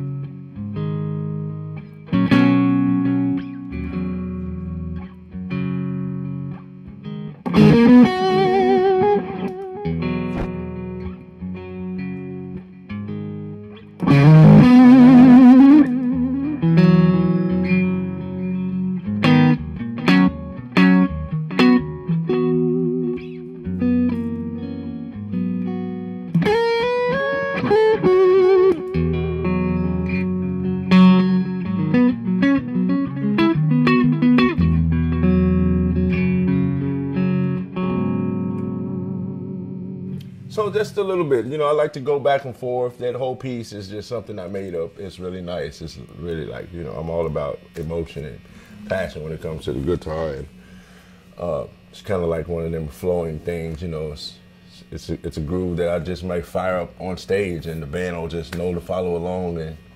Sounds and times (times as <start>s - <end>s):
Electric guitar: 0.0s - 41.3s, 45.9s - 59.9s
Strum: 7.2s - 12.8s, 13.5s - 42.4s.